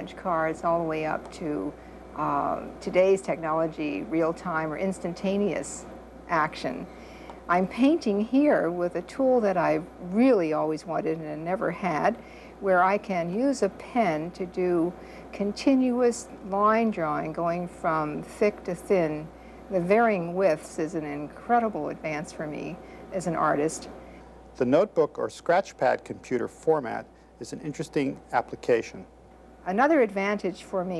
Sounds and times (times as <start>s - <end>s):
Speech: 0.0s - 6.9s, 7.5s - 23.9s, 24.6s - 29.1s, 29.7s - 31.0s.